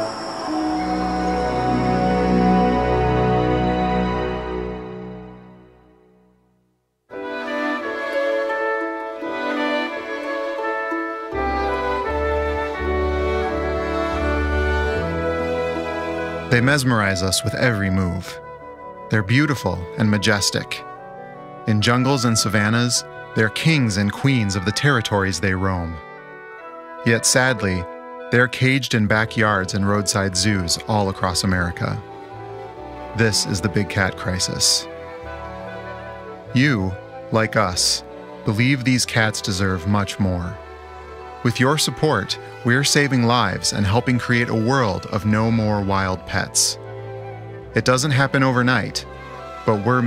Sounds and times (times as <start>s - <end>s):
Music: 0.0s - 50.0s
Speech: 16.5s - 18.4s, 19.1s - 20.8s, 21.7s - 26.0s, 27.1s - 32.0s, 33.2s - 34.9s, 36.5s - 40.6s, 41.4s - 46.8s, 47.8s - 49.1s, 49.7s - 50.0s.